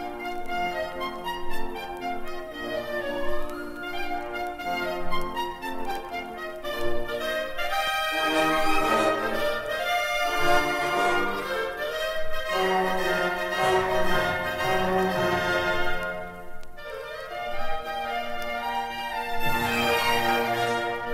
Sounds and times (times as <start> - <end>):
Music: 0.0 - 21.1.